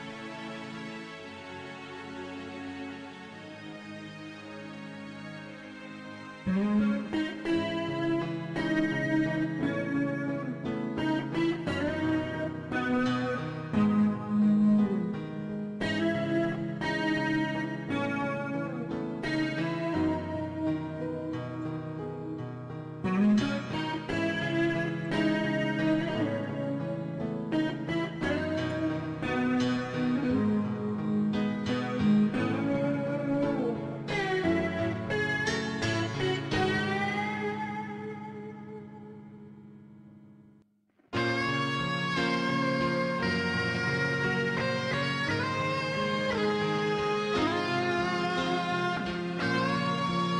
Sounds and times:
Music: 0.0s - 50.3s.

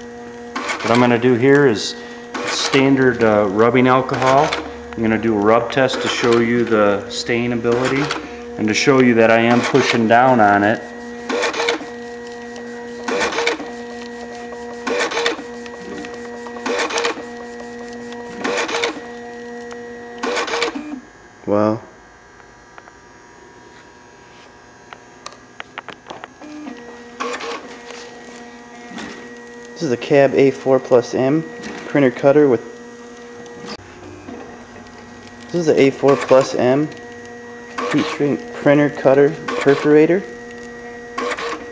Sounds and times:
Printer: 0.0s - 21.2s, 25.6s - 41.7s
Speech: 0.8s - 10.8s, 21.5s - 21.9s, 29.8s - 32.7s, 35.5s - 37.0s, 37.9s - 40.3s.

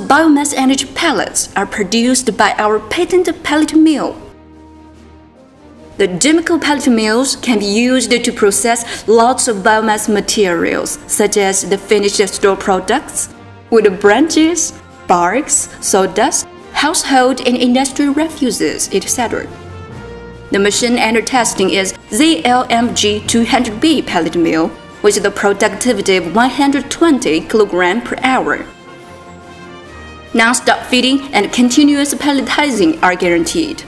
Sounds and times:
Speech: 0.0s - 4.3s, 6.0s - 19.5s, 20.5s - 28.7s, 30.4s - 33.8s
Music: 0.0s - 33.8s.

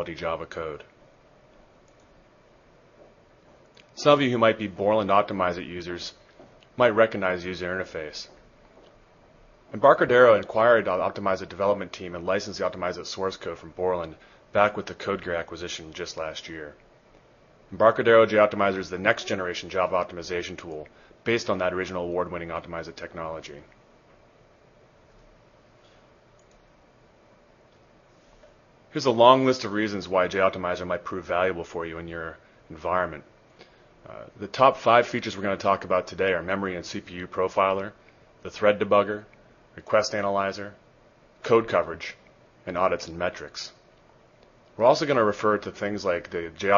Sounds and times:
Speech: 0.0s - 1.0s, 3.9s - 6.2s, 6.8s - 8.4s, 9.7s - 16.8s, 17.7s - 23.8s, 28.9s - 33.3s, 34.0s - 40.8s, 41.4s - 43.8s, 44.8s - 46.7s.

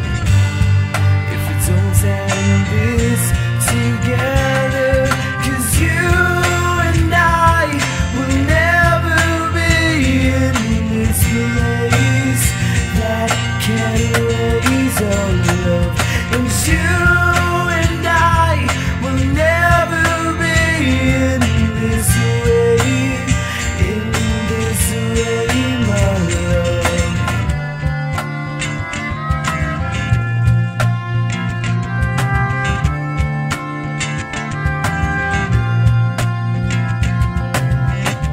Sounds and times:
Music: 0.0s - 38.3s
Singing: 1.4s - 27.5s.

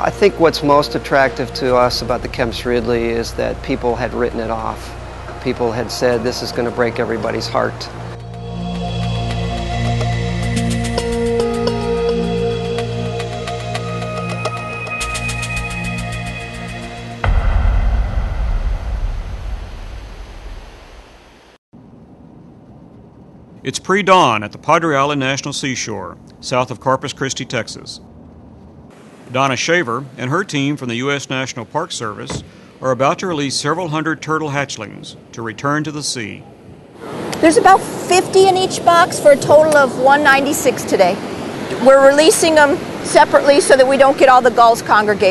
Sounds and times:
Speech: 0.0s - 7.9s, 23.7s - 28.0s, 29.3s - 36.4s, 37.4s - 41.2s, 41.8s - 45.3s
Music: 0.1s - 2.6s, 8.2s - 17.6s.

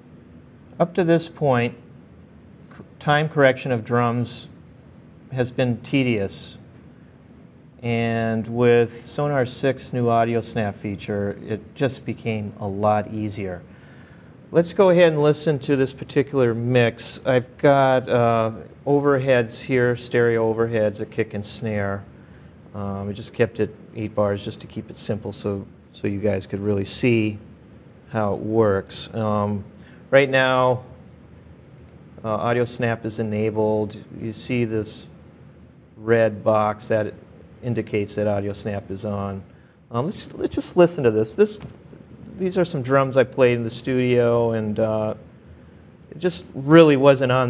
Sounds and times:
Speech: 0.8s - 1.9s, 2.7s - 4.6s, 5.3s - 6.7s, 7.8s - 13.7s, 14.5s - 22.1s, 22.7s - 27.5s, 28.1s - 31.0s, 32.2s - 35.2s, 36.0s - 45.2s, 46.1s - 47.4s.

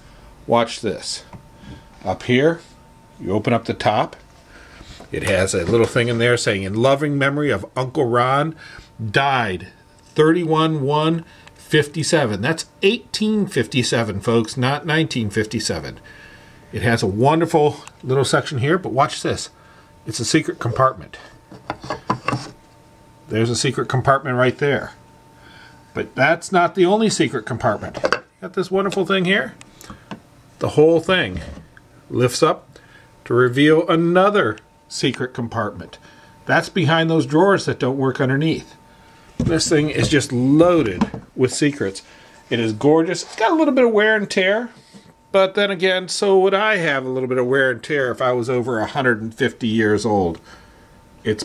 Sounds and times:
Speech: 0.5s - 1.4s, 2.0s - 4.2s, 5.1s - 16.0s, 16.7s - 21.4s, 23.3s - 25.0s, 26.0s - 29.6s, 30.6s - 38.8s, 39.4s - 50.4s, 51.2s - 51.4s.

